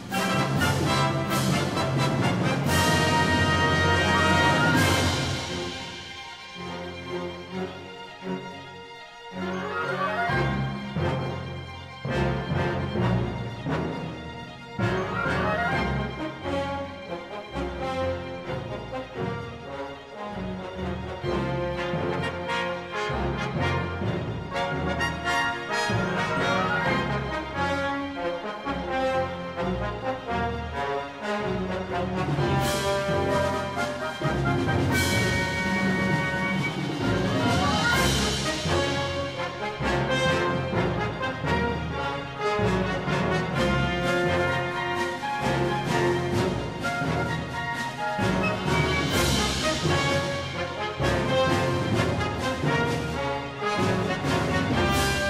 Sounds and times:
Music: 0.0 - 55.2.

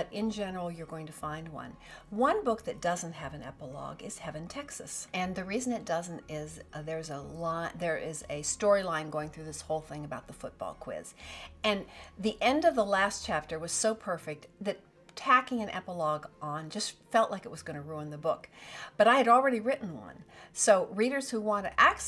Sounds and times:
Speech: 0.0 - 11.1, 11.7 - 22.0
Music: 0.0 - 22.0.

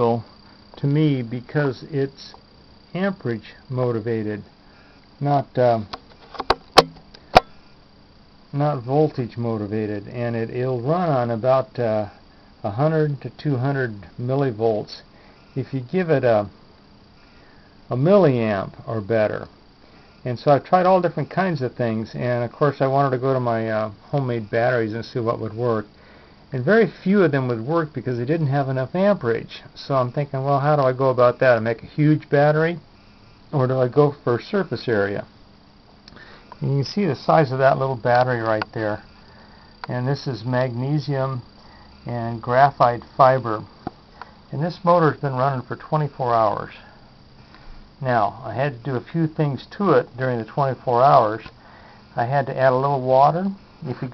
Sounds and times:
Speech: 0.0 - 4.5, 5.2 - 6.0, 8.5 - 16.5, 17.9 - 19.5, 20.2 - 25.9, 26.5 - 32.8, 33.5 - 35.3, 36.6 - 39.1, 39.8 - 43.7, 44.5 - 46.9, 48.0 - 51.5, 52.2 - 54.1.

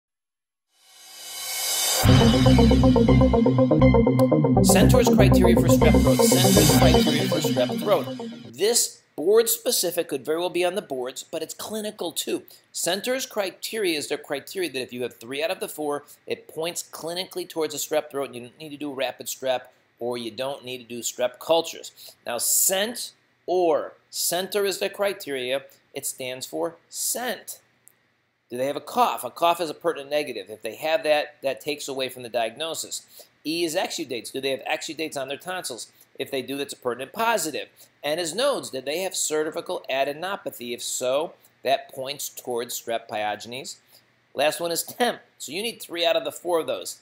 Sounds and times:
Music: 1.2 - 8.5
Speech: 4.7 - 27.7, 28.5 - 43.8, 44.4 - 47.0.

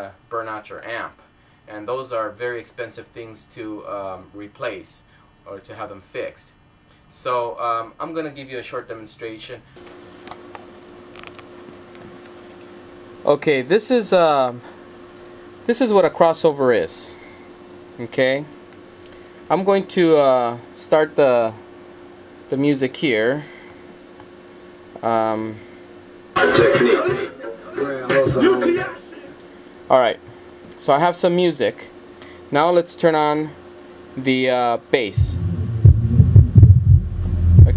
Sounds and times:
Speech: 0.0 - 9.6, 13.2 - 14.7, 15.7 - 17.2, 18.0 - 18.6, 19.5 - 21.6, 22.5 - 23.5, 25.0 - 25.6, 26.4 - 30.2, 30.8 - 33.6, 34.2 - 35.4
Music: 26.4 - 28.6.

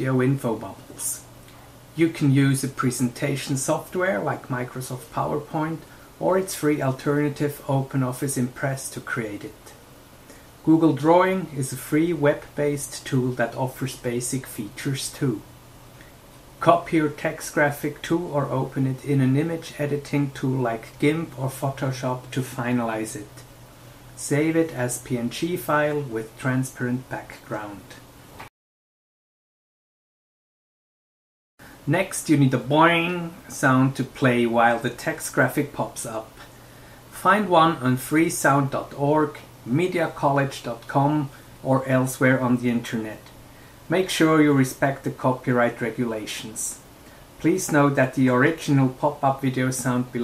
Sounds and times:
Speech: 0.0 - 1.3, 2.0 - 9.8, 10.6 - 15.5, 16.6 - 23.5, 24.2 - 28.1, 31.8 - 36.5, 37.1 - 50.2.

